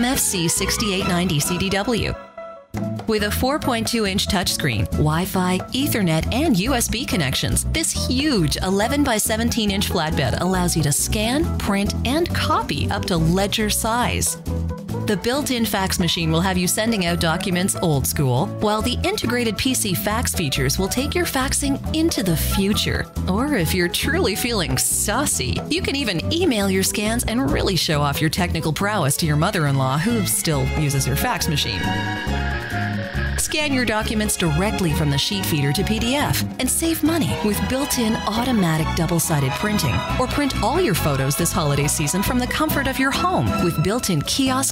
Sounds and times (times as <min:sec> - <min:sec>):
Speech: 0:00.0 - 0:02.2, 0:03.1 - 0:14.4, 0:15.1 - 0:31.9, 0:33.4 - 0:44.7
Music: 0:00.0 - 0:44.7.